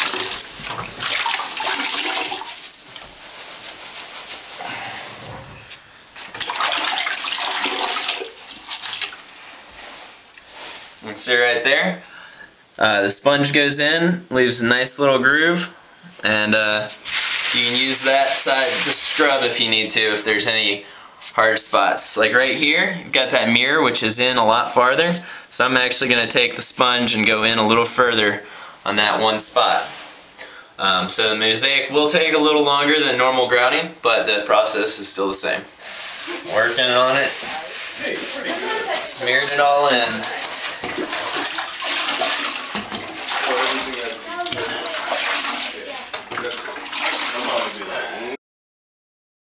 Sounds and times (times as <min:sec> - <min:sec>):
Inside, small room: 0:00.0 - 0:48.4
Speech: 0:47.3 - 0:48.4.